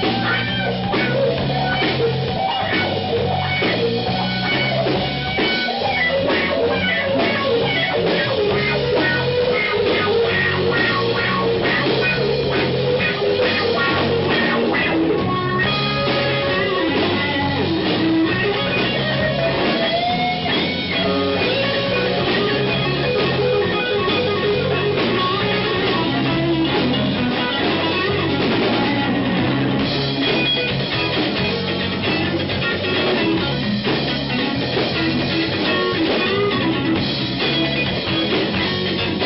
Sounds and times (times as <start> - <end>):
Blues: 0.0 - 39.2
Drum: 0.0 - 39.2
Guitar: 0.0 - 39.2.